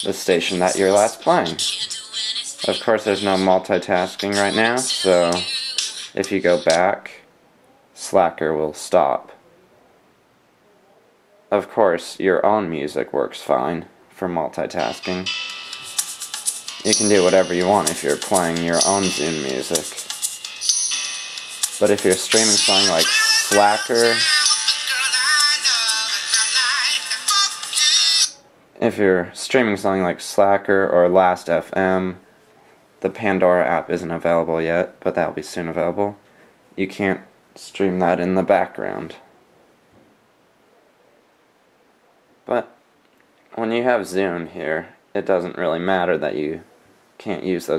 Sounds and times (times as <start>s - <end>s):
Pop music: 0.0s - 6.8s, 14.8s - 28.4s
Speech: 0.0s - 9.9s, 10.6s - 15.3s, 16.9s - 20.0s, 21.8s - 24.3s, 28.8s - 32.2s, 33.0s - 36.2s, 36.8s - 39.3s, 42.5s - 42.8s, 43.6s - 47.7s.